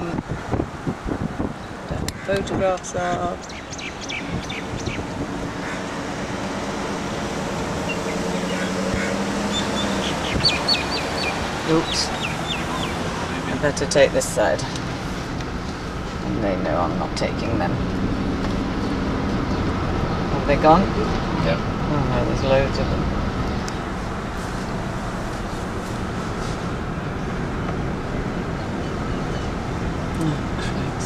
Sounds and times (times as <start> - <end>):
Car: 0.0 - 31.0
Speech: 1.9 - 3.4, 11.6 - 12.1, 16.2 - 17.8, 20.3 - 23.0, 30.2 - 31.0.